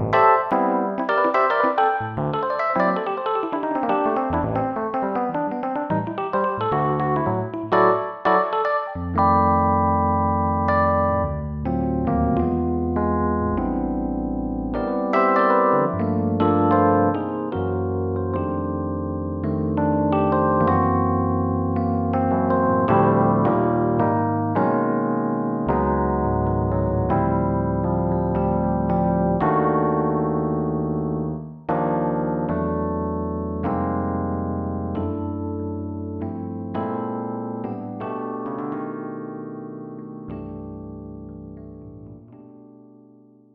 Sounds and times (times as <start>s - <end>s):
Electric piano: 0.0s - 43.5s.